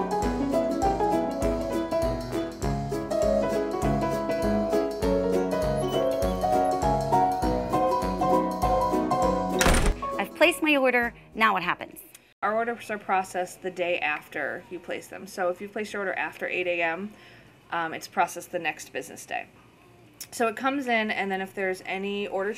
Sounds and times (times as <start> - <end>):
Music: 0.0 - 11.4
Speech: 10.2 - 17.1, 17.7 - 22.5.